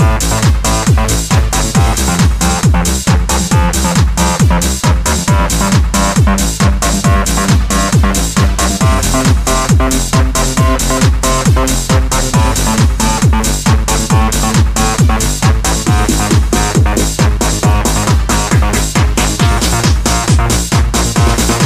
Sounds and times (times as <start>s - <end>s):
Techno: 0.0s - 21.6s
Video game music: 0.0s - 21.6s.